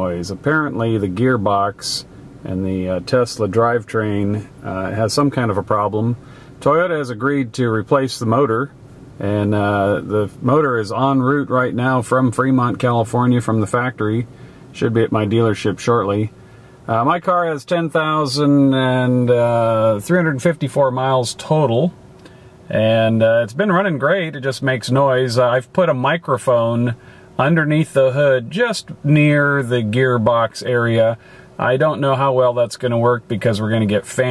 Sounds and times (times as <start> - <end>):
Speech: 0.0 - 22.0, 22.7 - 34.3.